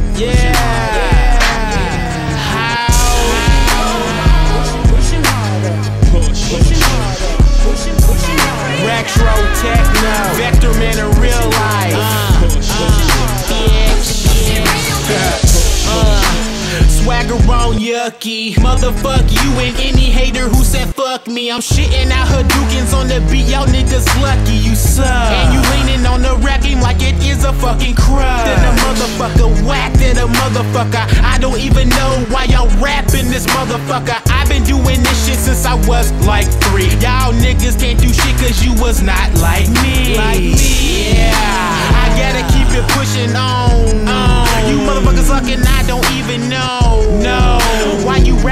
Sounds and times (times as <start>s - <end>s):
Techno: 0.0s - 17.9s, 21.7s - 48.5s.